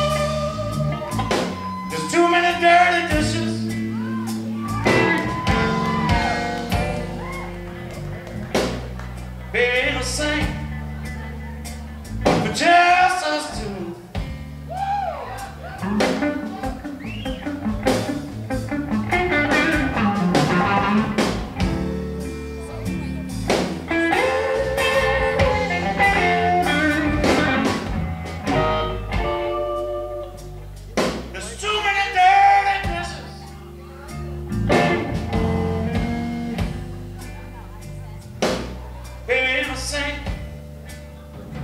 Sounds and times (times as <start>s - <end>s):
Music: 0.0s - 41.6s.